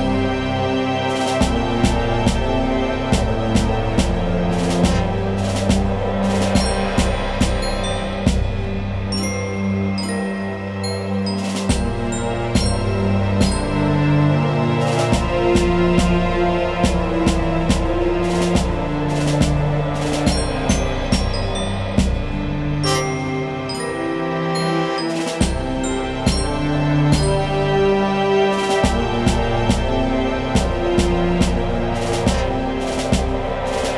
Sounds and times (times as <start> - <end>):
Music: 0.0 - 33.9.